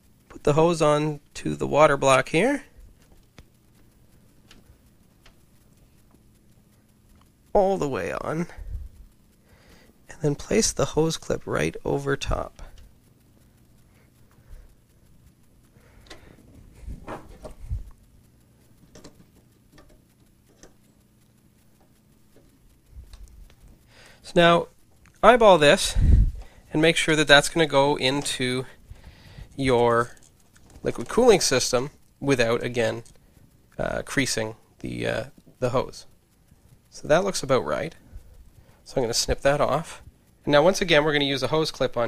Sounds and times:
Speech: 0.3 - 2.8, 7.5 - 8.6, 10.1 - 12.8, 24.2 - 26.0, 26.7 - 28.8, 29.6 - 30.2, 30.8 - 33.1, 33.8 - 36.1, 36.9 - 38.0, 38.9 - 42.0.

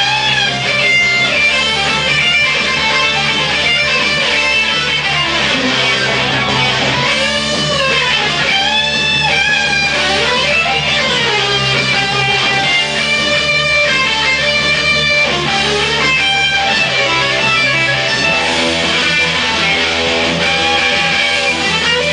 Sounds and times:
Electric guitar: 0.0 - 22.1.

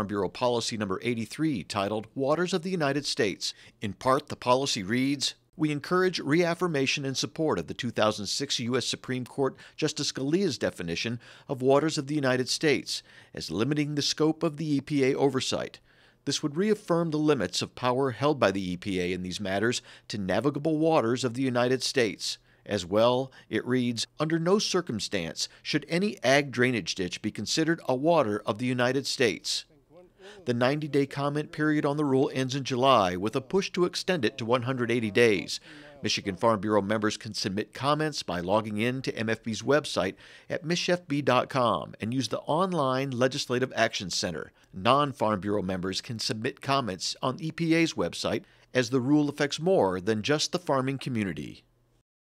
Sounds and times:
Narration, monologue: 0.0 - 52.1.

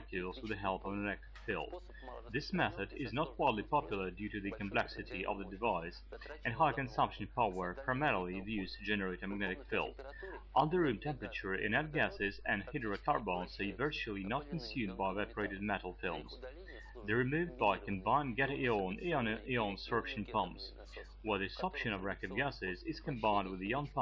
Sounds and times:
Speech: 0.0 - 24.0.

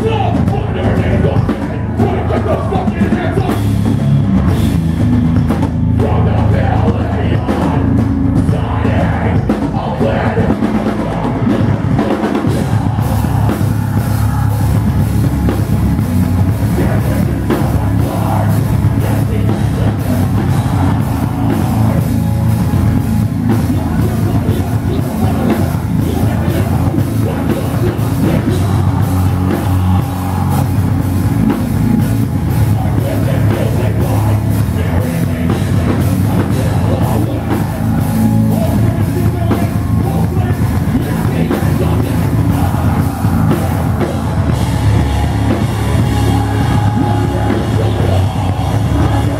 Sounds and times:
Singing: 0.0 - 4.7, 5.5 - 49.4
Music: 0.0 - 49.4.

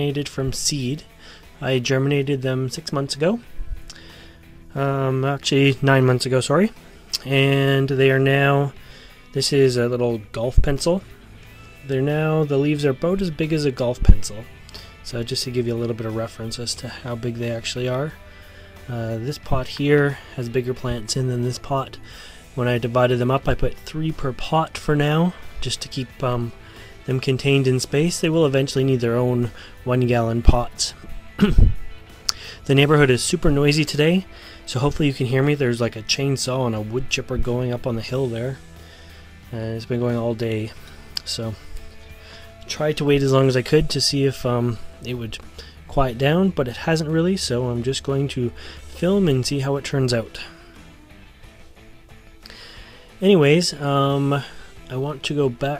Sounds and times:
Speech: 0.0 - 1.0, 1.6 - 3.4, 4.7 - 8.7, 9.4 - 11.0, 11.8 - 18.2, 18.9 - 22.0, 22.6 - 26.5, 27.1 - 31.5, 32.7 - 38.6, 39.5 - 41.6, 42.7 - 50.5, 53.2 - 55.7
Music: 0.0 - 55.7.

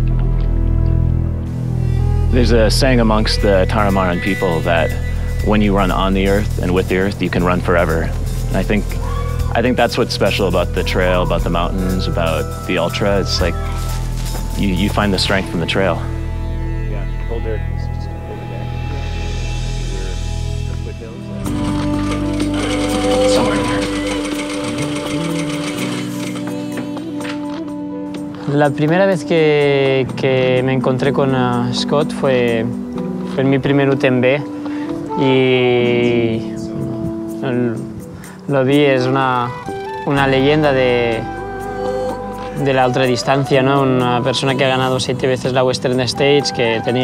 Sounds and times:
Music: 0.0 - 47.0
Speech: 2.3 - 13.6, 14.6 - 16.1, 16.9 - 19.2, 19.8 - 21.2, 23.3 - 24.0, 28.4 - 32.7, 33.3 - 34.4, 35.2 - 37.8, 38.5 - 41.3, 42.6 - 47.0.

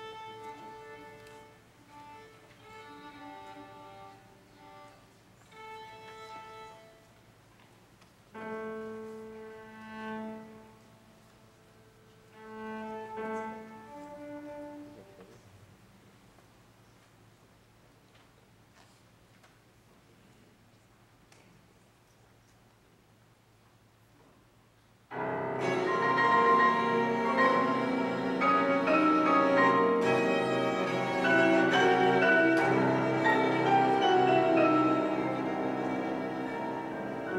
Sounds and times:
Violin, fiddle: 0.0 - 7.2, 25.2 - 37.3
Cello: 0.0 - 15.6, 25.1 - 37.3.

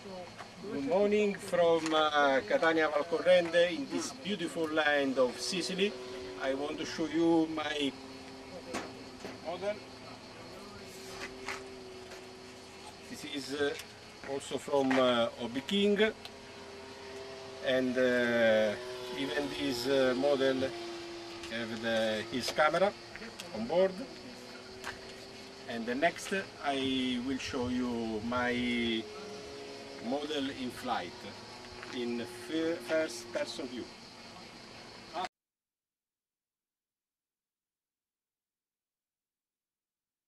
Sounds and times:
Speech: 0.0 - 8.0, 13.1 - 16.2, 21.5 - 24.2, 25.7 - 29.1, 30.0 - 31.3, 31.9 - 33.9.

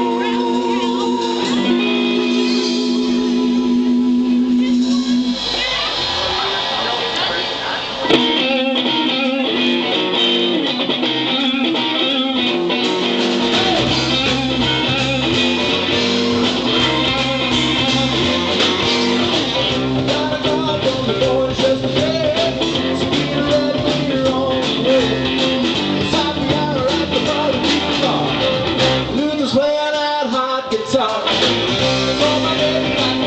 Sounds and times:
Music: 0.0 - 33.2.

